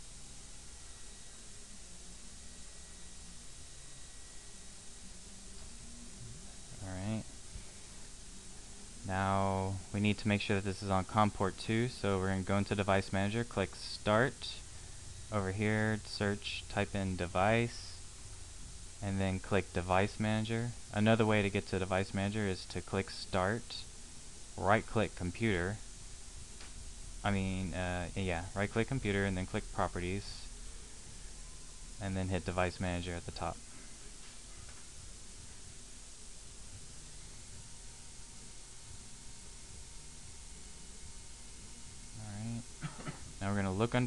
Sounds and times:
Speech: 0:06.7 - 0:07.3, 0:09.0 - 0:14.6, 0:15.3 - 0:18.0, 0:19.0 - 0:23.9, 0:24.6 - 0:25.8, 0:27.2 - 0:30.6, 0:32.0 - 0:33.6, 0:42.2 - 0:42.7, 0:43.4 - 0:44.0.

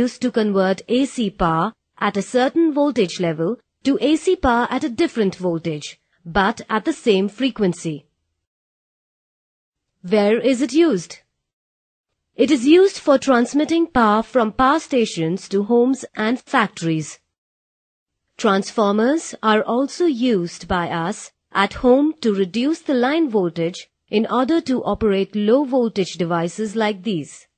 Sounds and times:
Speech: 0:00.0 - 0:08.1, 0:10.0 - 0:11.3, 0:12.4 - 0:17.2, 0:18.4 - 0:27.5.

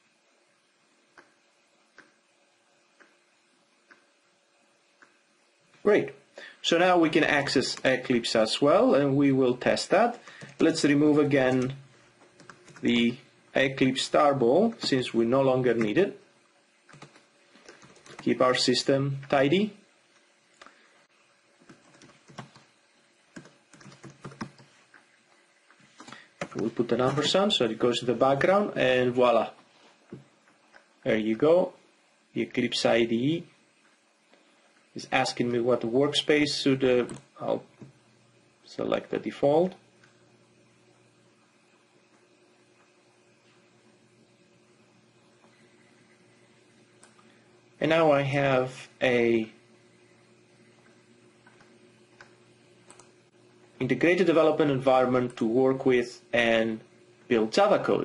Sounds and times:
Speech: 0:05.8 - 0:11.8, 0:12.8 - 0:16.2, 0:18.2 - 0:19.8, 0:26.6 - 0:29.6, 0:31.0 - 0:33.6, 0:35.0 - 0:37.7, 0:38.6 - 0:39.8, 0:47.8 - 0:49.6, 0:53.8 - 0:58.0.

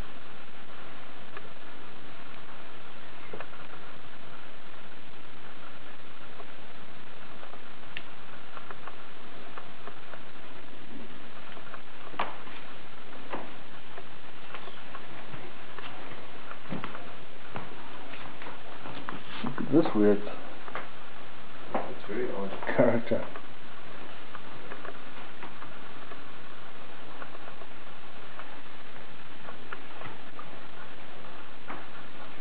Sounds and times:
Speech: 0:19.5 - 0:20.4, 0:22.0 - 0:23.4.

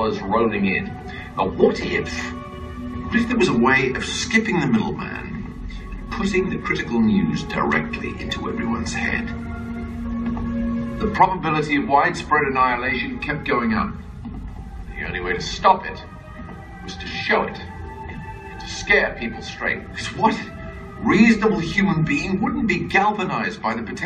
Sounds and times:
Male speech, man speaking: 0:00.0 - 0:02.4, 0:03.1 - 0:05.5, 0:06.1 - 0:09.3, 0:11.0 - 0:14.0, 0:14.9 - 0:16.1, 0:16.9 - 0:17.7, 0:18.6 - 0:24.0
Music: 0:00.0 - 0:24.0.

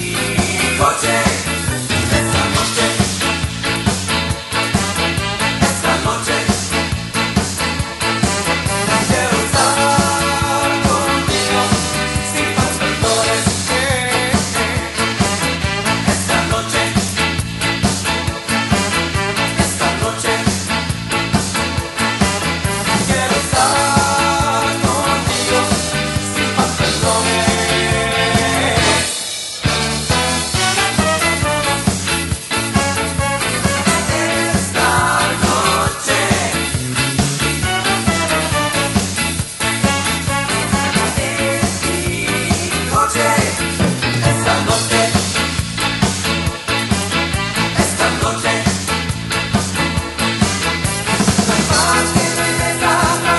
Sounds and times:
Disco: 0:00.0 - 0:53.3.

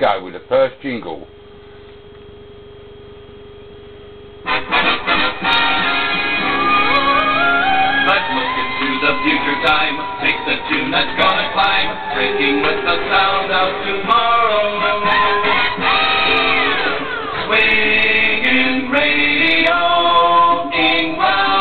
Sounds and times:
Music: 0:04.4 - 0:21.6.

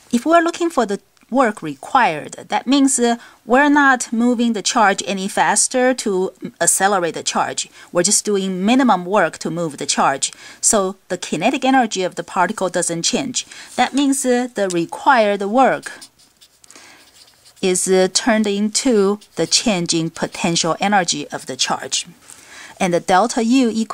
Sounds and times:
Speech: 0:00.1 - 0:16.1, 0:17.6 - 0:22.2, 0:22.8 - 0:23.9.

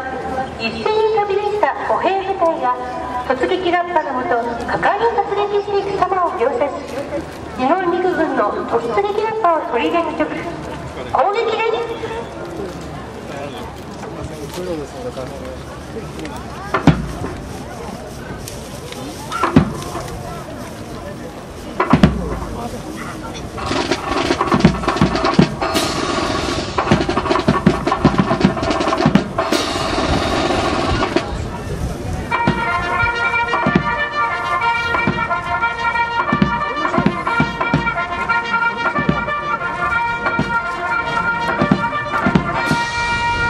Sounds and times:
Speech: 0:00.0 - 0:23.6, 0:31.0 - 0:33.3, 0:36.2 - 0:42.4
Music: 0:23.6 - 0:31.3, 0:32.3 - 0:43.5.

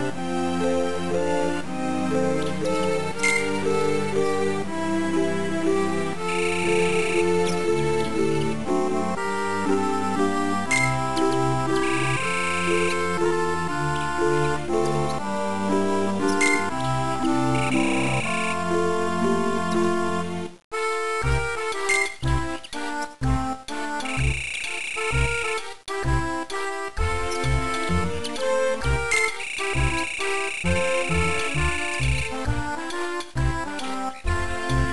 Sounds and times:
Music: 0:00.0 - 0:34.9.

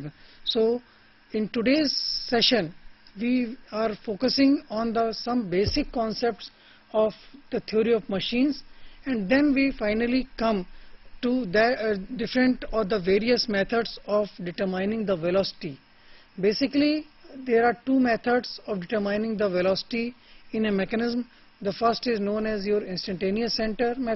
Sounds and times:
Narration, monologue: 0:00.0 - 0:24.1.

